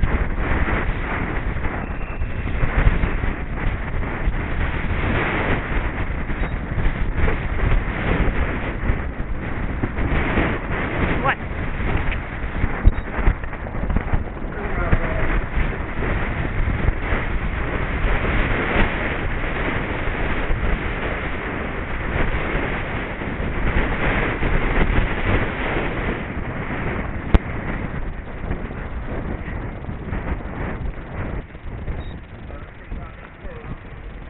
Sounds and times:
Clip-clop: 0.0s - 34.3s
Speech: 11.2s - 11.4s, 14.6s - 15.3s, 32.5s - 33.9s.

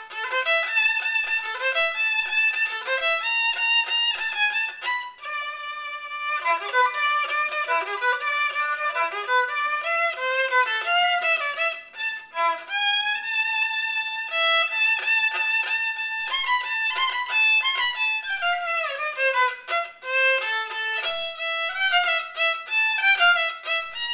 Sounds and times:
Violin, fiddle: 0.0s - 24.1s.

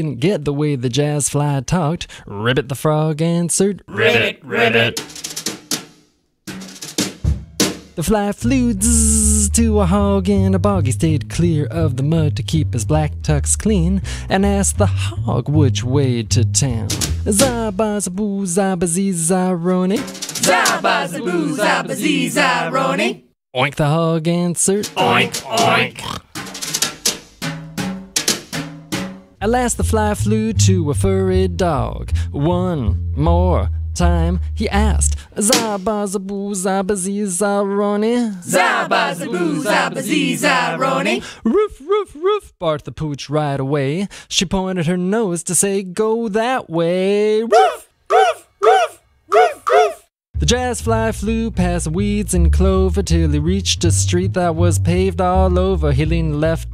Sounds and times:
Music: 5.0s - 18.2s, 19.8s - 20.6s, 26.2s - 36.0s, 50.4s - 56.7s.

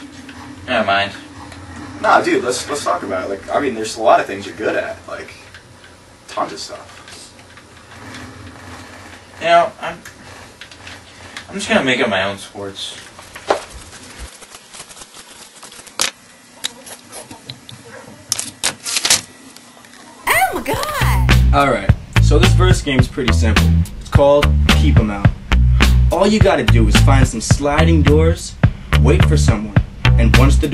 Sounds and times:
Speech: 0.7s - 1.3s, 2.0s - 5.5s, 6.3s - 7.4s, 9.4s - 10.1s, 11.5s - 13.1s, 20.3s - 25.3s, 26.2s - 30.7s
Music: 20.8s - 30.7s.

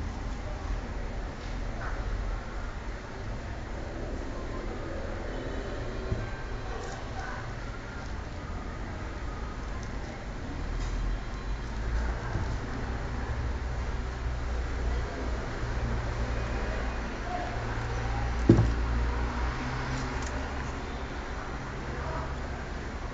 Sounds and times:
Speech: 0.0s - 18.9s, 20.3s - 23.1s.

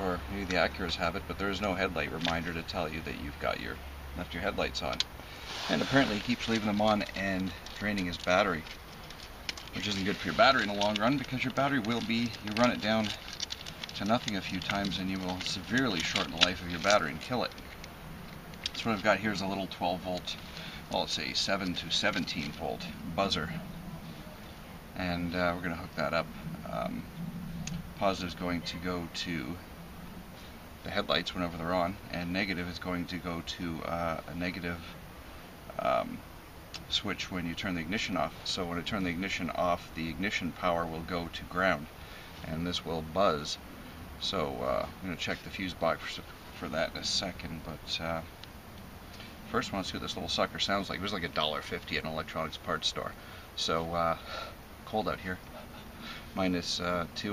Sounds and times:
Speech: 0.0s - 8.8s, 9.8s - 13.3s, 14.0s - 17.6s, 18.8s - 23.6s, 25.0s - 27.1s, 28.0s - 29.6s, 30.8s - 35.0s, 35.7s - 36.2s, 36.8s - 43.6s, 44.2s - 48.3s, 49.5s - 55.5s, 56.4s - 57.3s.

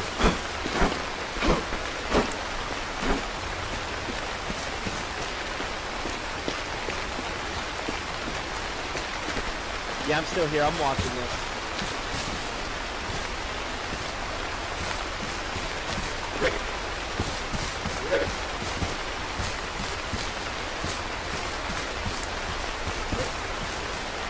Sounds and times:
Rain: 0.0s - 24.3s.

